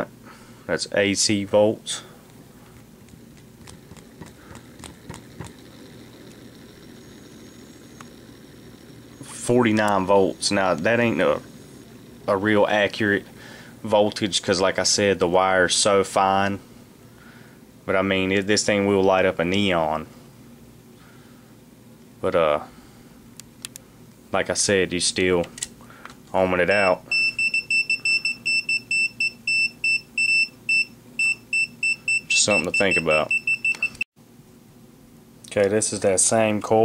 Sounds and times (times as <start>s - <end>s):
Speech: 0.7s - 2.1s, 9.2s - 11.5s, 12.3s - 16.6s, 17.9s - 20.1s, 22.2s - 22.7s, 24.3s - 25.6s, 26.3s - 27.0s, 32.3s - 33.3s, 35.5s - 36.8s
Beep, bleep: 26.8s - 34.0s.